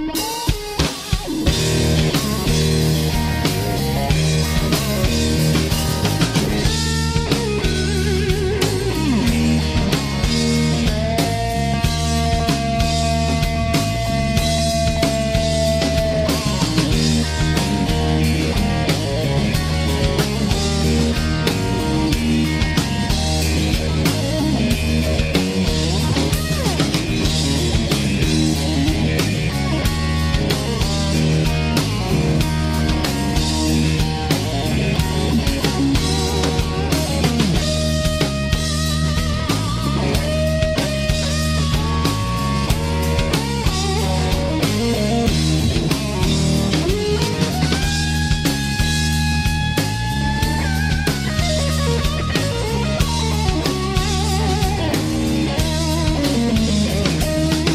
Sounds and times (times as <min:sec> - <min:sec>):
Bass guitar: 0:00.0 - 0:57.7.